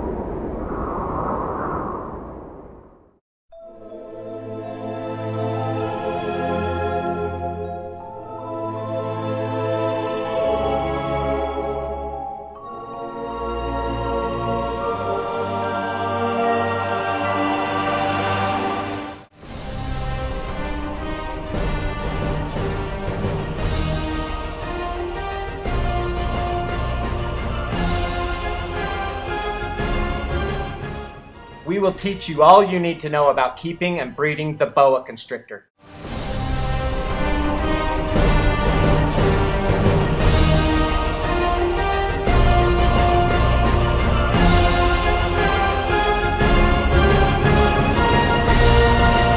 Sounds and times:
Music: 3.5s - 35.2s, 35.8s - 49.3s
Speech: 31.7s - 35.7s.

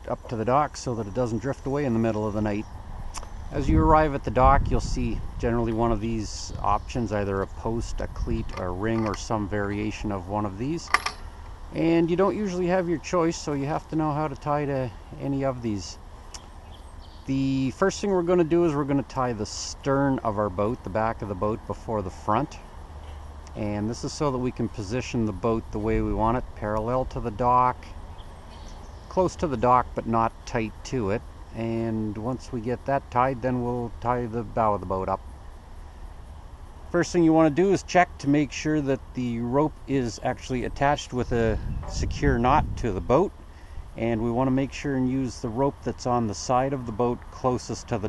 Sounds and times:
Speech: 0.0s - 2.7s, 3.5s - 11.0s, 11.7s - 16.0s, 17.3s - 22.6s, 23.5s - 27.9s, 29.1s - 35.2s, 36.9s - 43.4s, 44.0s - 48.0s.

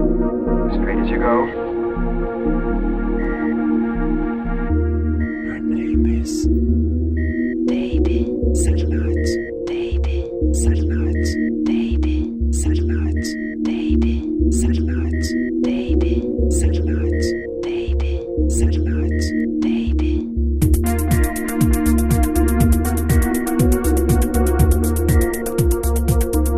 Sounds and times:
Electronic music: 0.0s - 26.5s.

